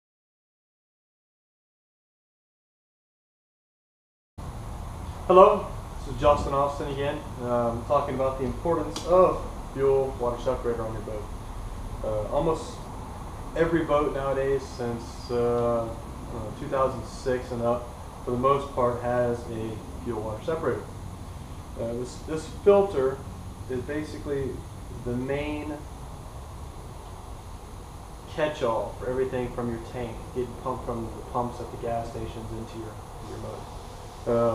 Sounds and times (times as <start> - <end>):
Speech: 5.3 - 11.3, 12.0 - 12.9, 13.6 - 20.9, 21.8 - 25.9, 28.3 - 33.6, 34.3 - 34.5.